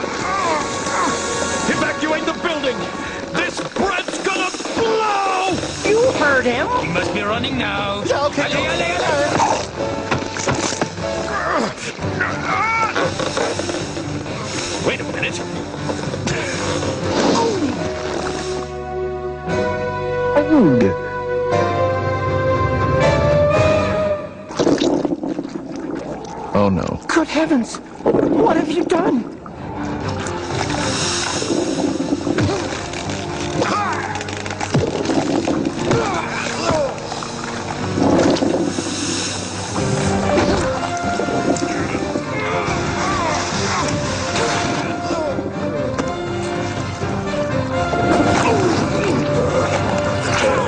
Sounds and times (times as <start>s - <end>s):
Music: 0.0s - 25.1s, 27.5s - 50.6s.